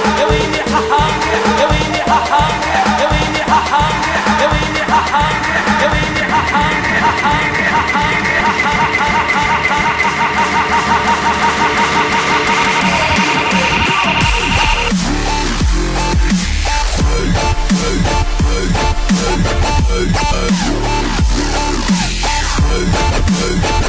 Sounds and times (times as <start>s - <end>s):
Dubstep: 0.0s - 23.8s.